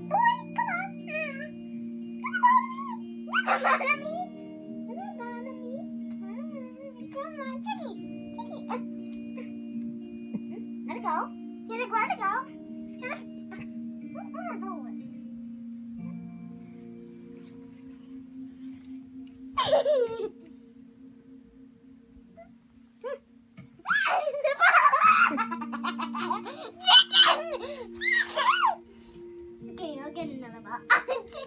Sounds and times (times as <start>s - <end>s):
Speech: 4.9s - 8.8s, 29.7s - 31.4s.